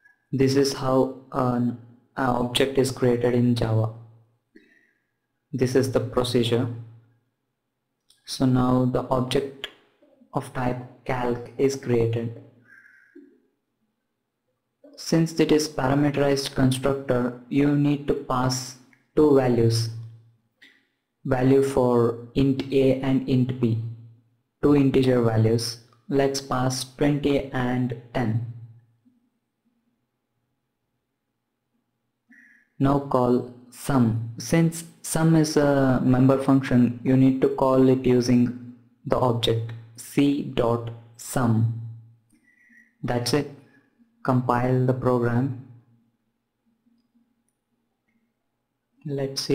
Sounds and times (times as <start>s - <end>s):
Inside, small room: 0.0s - 49.5s
Speech: 0.4s - 4.1s, 5.6s - 6.9s, 8.2s - 12.9s, 14.9s - 20.0s, 21.3s - 24.0s, 24.6s - 28.7s, 32.8s - 42.0s, 43.0s - 43.5s, 44.2s - 45.8s, 49.0s - 49.5s.